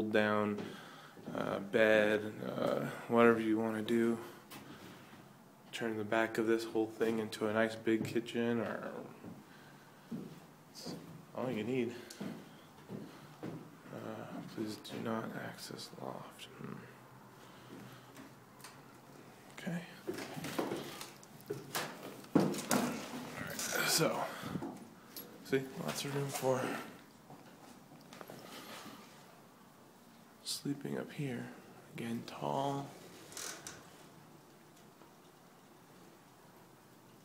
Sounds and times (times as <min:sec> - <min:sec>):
Inside, small room: 0:00.0 - 0:37.2
Speech: 0:01.3 - 0:04.4, 0:05.7 - 0:09.2, 0:10.8 - 0:12.1, 0:13.9 - 0:16.9, 0:25.4 - 0:27.0, 0:30.4 - 0:33.0.